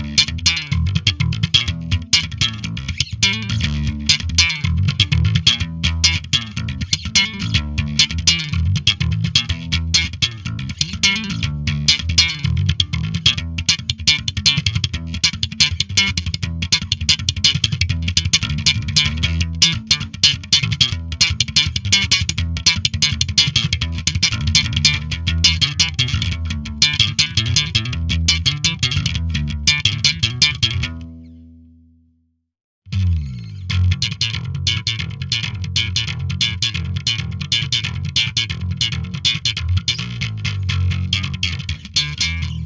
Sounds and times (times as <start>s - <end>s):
Music: 0.0s - 32.3s, 32.9s - 42.6s.